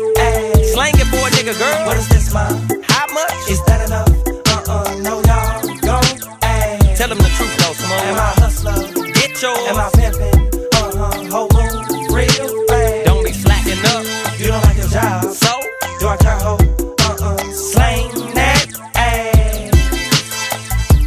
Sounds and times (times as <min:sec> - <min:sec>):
Hip hop music: 0:00.0 - 0:21.0
Rapping: 0:00.1 - 0:20.1.